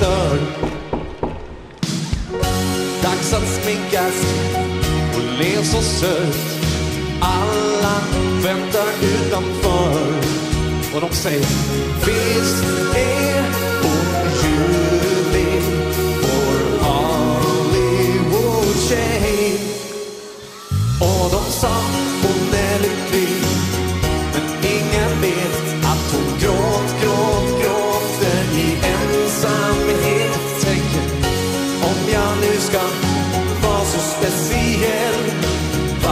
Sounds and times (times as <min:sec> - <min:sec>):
Music: 0:00.0 - 0:36.1
Singing: 0:03.0 - 0:36.1.